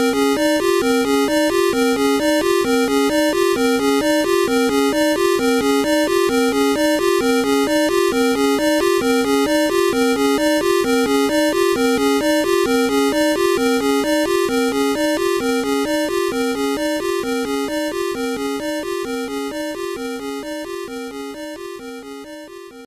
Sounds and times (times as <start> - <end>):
Video game music: 0.0 - 22.8.